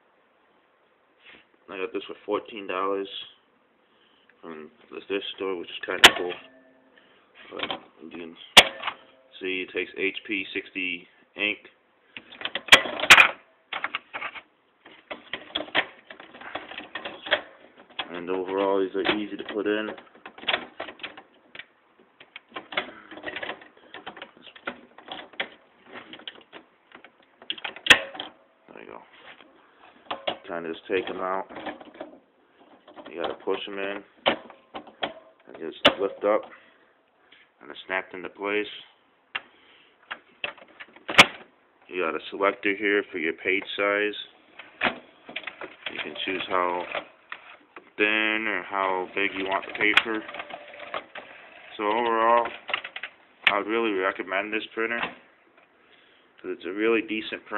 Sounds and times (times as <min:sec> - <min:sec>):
Inside, small room: 0:00.0 - 0:57.5
Speech: 0:01.7 - 0:03.4, 0:04.4 - 0:06.4, 0:07.4 - 0:08.6, 0:09.3 - 0:11.8, 0:18.0 - 0:20.0, 0:28.7 - 0:29.1, 0:30.5 - 0:31.5, 0:33.1 - 0:34.1, 0:35.5 - 0:36.5, 0:37.6 - 0:39.0, 0:41.9 - 0:44.4, 0:45.9 - 0:47.0, 0:48.0 - 0:50.4, 0:51.7 - 0:52.6, 0:53.4 - 0:55.2, 0:56.4 - 0:57.5.